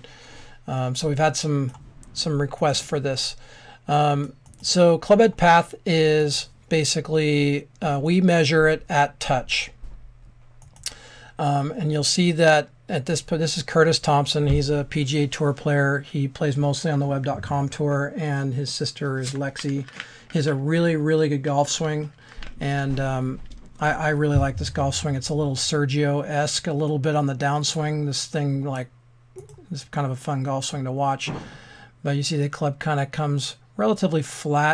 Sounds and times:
Speech: 0.7s - 9.8s, 11.4s - 34.7s.

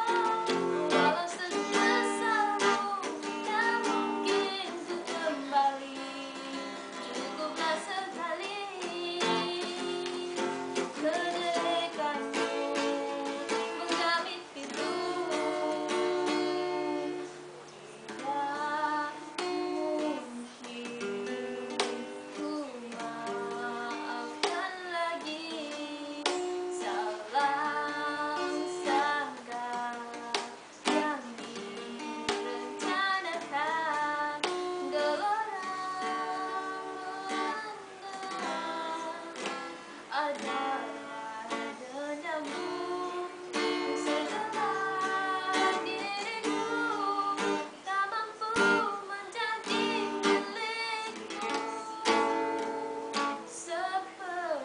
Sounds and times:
Child singing: 0.0s - 17.4s, 18.1s - 54.6s
Acoustic guitar: 0.0s - 54.6s.

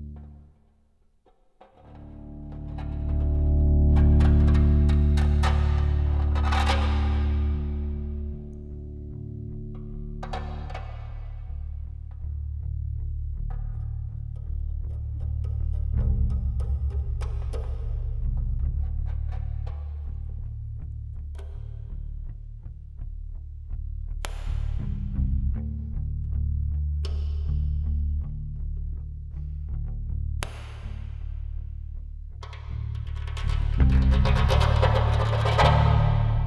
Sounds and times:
Music: 0.0s - 36.4s.

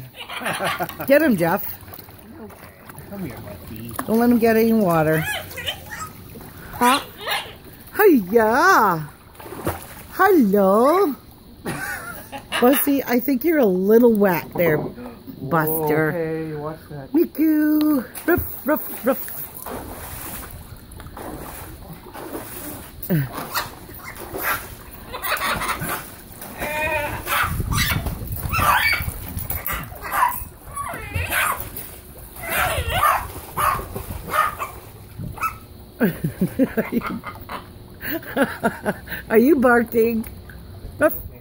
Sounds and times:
Bark: 27.3s - 29.0s, 29.7s - 30.4s, 31.2s - 31.6s, 32.5s - 34.8s.

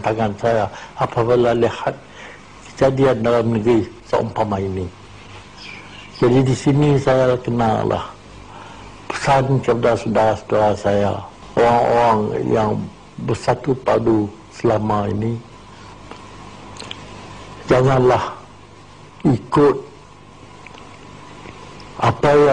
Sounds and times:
Male speech, man speaking: 0.0s - 2.0s, 2.7s - 5.0s, 6.2s - 8.2s, 9.1s - 15.5s, 17.7s - 18.5s, 19.2s - 20.0s, 22.0s - 22.5s
Narration, monologue: 0.0s - 22.5s.

